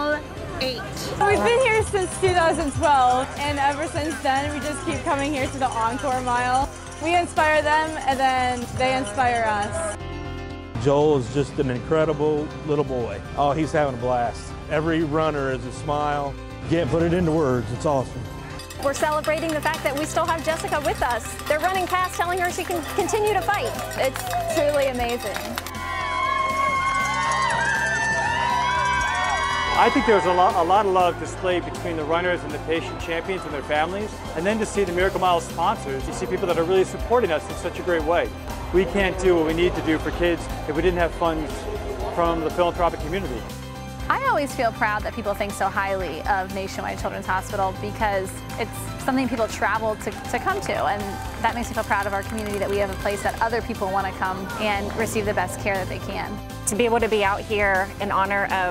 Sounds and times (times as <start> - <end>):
Music: 0.0 - 58.7.